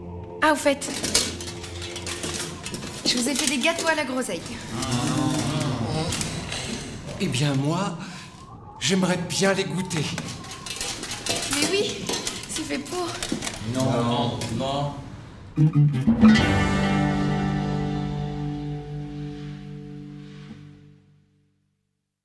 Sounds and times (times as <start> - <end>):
Inside, large room or hall: 0.0 - 15.2.